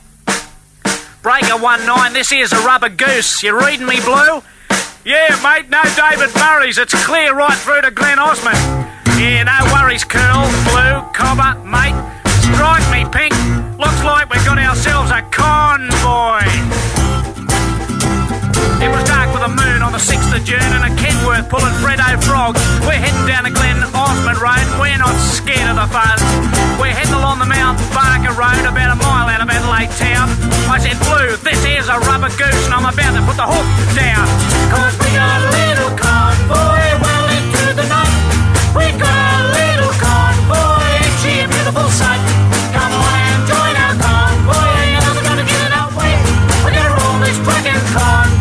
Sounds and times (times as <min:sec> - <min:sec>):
Music: 0:00.0 - 0:48.4.